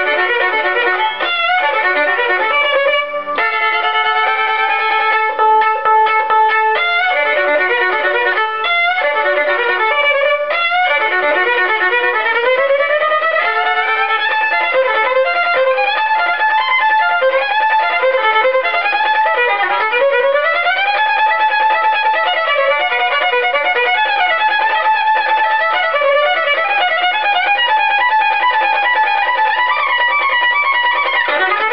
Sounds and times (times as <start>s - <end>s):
Violin, fiddle: 0.0s - 31.7s.